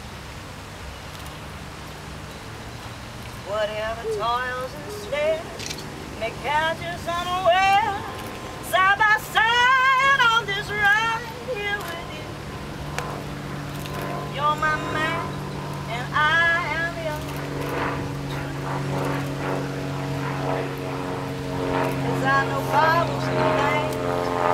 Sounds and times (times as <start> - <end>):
Female singing: 3.5 - 5.6, 6.2 - 12.3, 14.4 - 15.3, 15.9 - 17.2, 22.0 - 24.4.